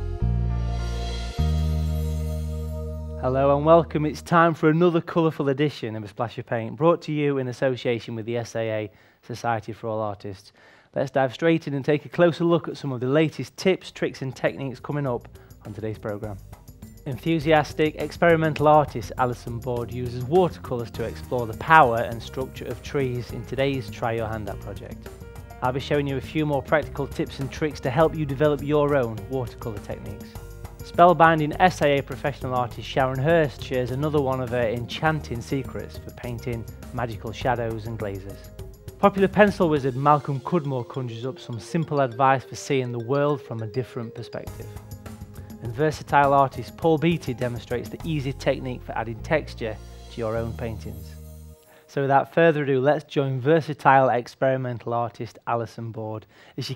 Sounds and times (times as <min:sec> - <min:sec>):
Music: 0:00.0 - 0:05.5, 0:12.0 - 0:53.2
Speech: 0:03.2 - 0:16.4, 0:17.1 - 0:25.0, 0:25.6 - 0:44.7, 0:45.6 - 0:51.2, 0:51.9 - 0:56.7.